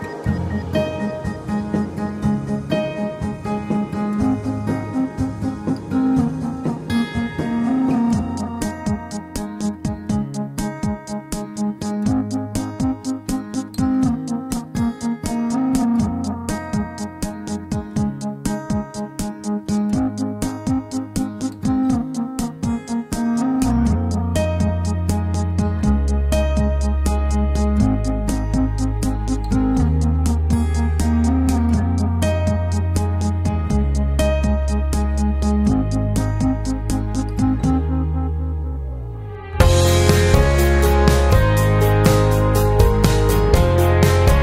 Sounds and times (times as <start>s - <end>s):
Music: 0.0s - 44.4s.